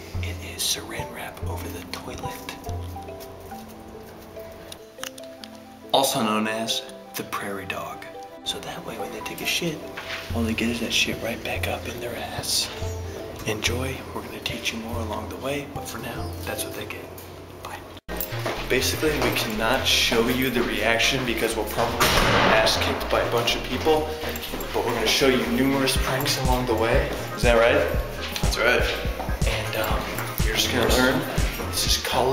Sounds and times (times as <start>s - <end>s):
Music: 0.0s - 32.3s
Speech: 0.2s - 2.7s, 6.0s - 12.8s, 13.4s - 17.1s, 18.6s - 32.3s.